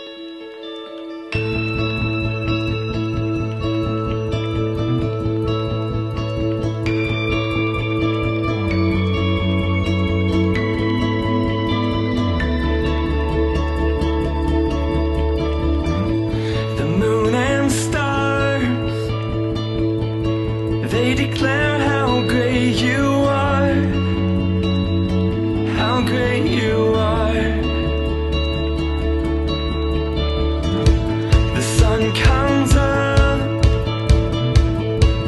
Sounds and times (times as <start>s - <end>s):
Strum: 0.0s - 35.2s.